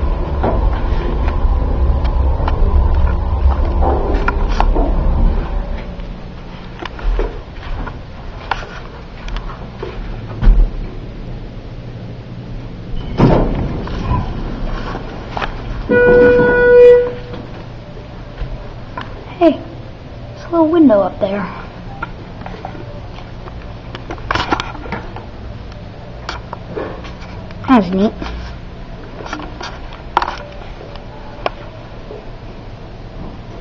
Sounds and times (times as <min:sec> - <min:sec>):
Speech: 0:20.4 - 0:21.5, 0:27.7 - 0:28.2.